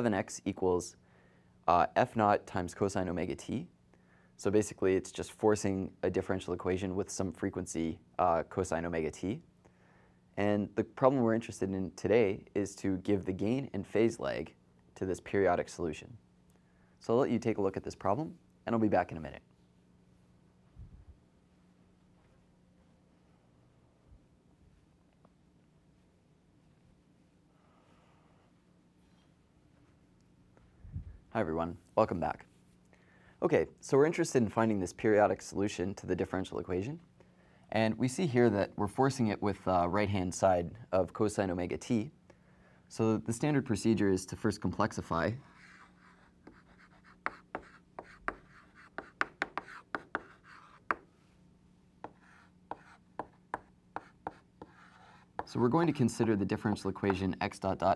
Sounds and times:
Writing: 45.4s - 51.1s, 52.0s - 57.2s.

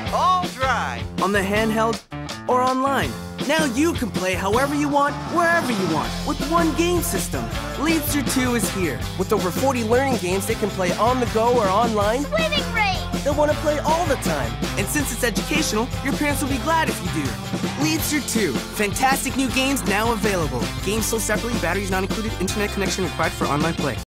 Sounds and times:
Music: 0.0s - 24.1s
Speech: 0.1s - 24.0s.

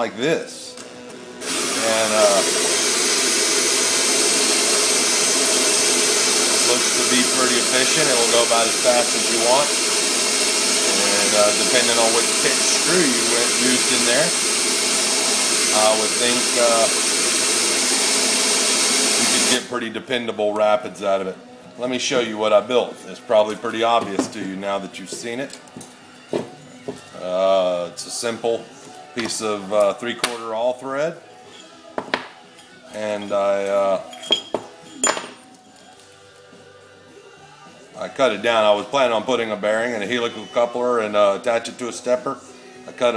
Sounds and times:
Speech: 1.8s - 2.5s, 10.9s - 14.3s, 15.7s - 16.9s.

